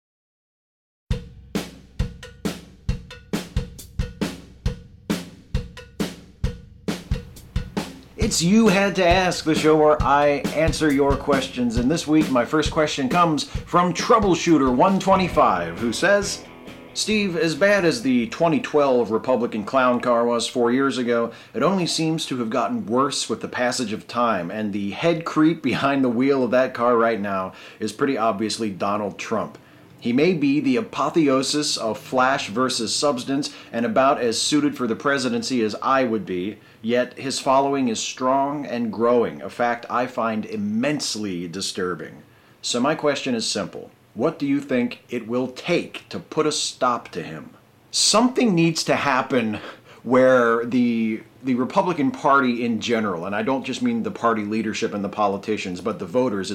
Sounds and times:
Drum kit: 1.1s - 20.2s.

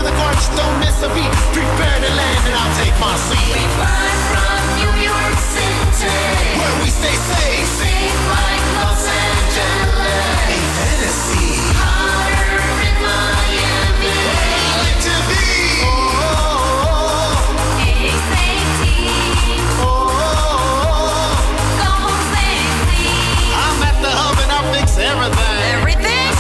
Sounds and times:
Dance music: 0.0s - 26.4s
Soundtrack music: 0.0s - 26.4s.

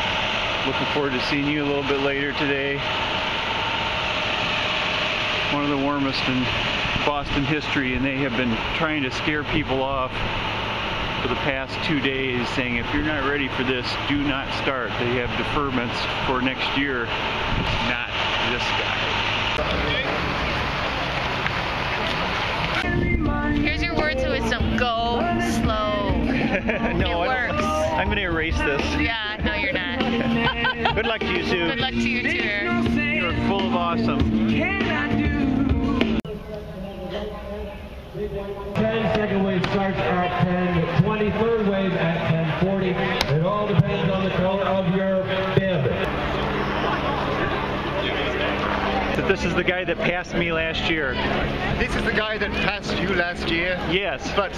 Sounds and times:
Outside, urban or manmade: 0.0s - 54.5s
Speech: 0.7s - 2.8s, 23.6s - 26.1s, 36.3s - 46.0s.

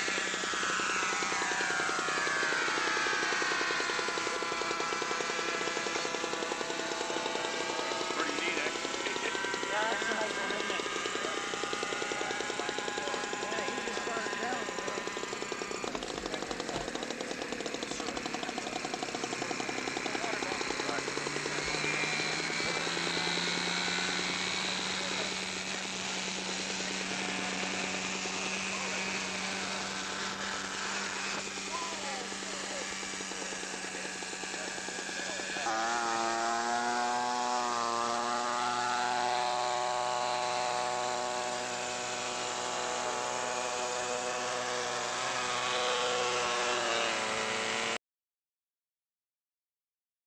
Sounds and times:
Fixed-wing aircraft, airplane: 0.0s - 48.0s.

